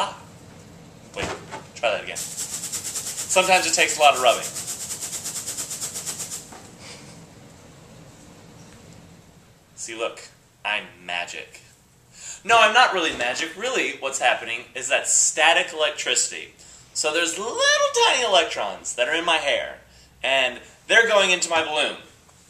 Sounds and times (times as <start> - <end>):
Speech: 0.0 - 0.3, 1.2 - 2.2, 3.3 - 4.5, 9.8 - 11.7, 12.4 - 22.2.